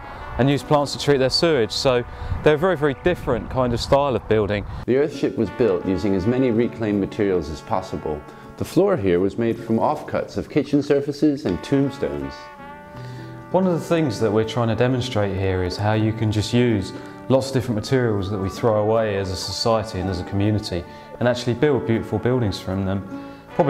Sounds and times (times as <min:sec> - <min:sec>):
Music: 0:00.0 - 0:23.6
Speech: 0:00.4 - 0:12.5, 0:13.5 - 0:23.6.